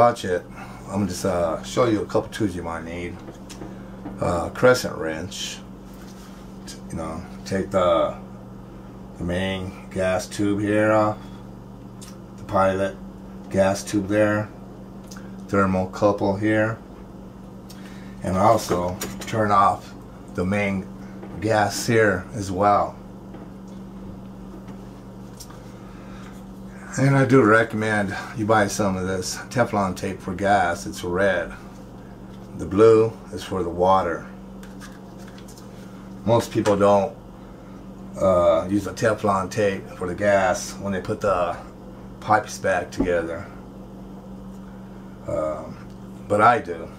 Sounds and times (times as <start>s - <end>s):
Speech: 0.0s - 3.3s, 4.2s - 5.7s, 6.7s - 8.2s, 9.2s - 11.2s, 12.4s - 14.6s, 15.5s - 16.8s, 18.2s - 23.0s, 26.8s - 31.6s, 32.6s - 34.4s, 36.2s - 37.2s, 38.2s - 43.6s, 45.3s - 46.9s.